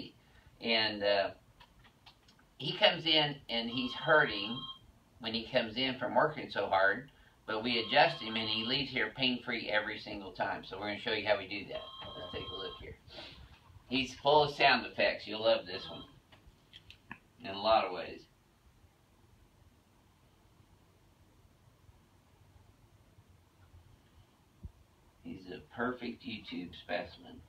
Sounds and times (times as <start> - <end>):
Speech: 0.0 - 1.4, 2.6 - 4.6, 5.2 - 13.0, 13.9 - 16.1, 17.4 - 18.3, 25.2 - 27.4.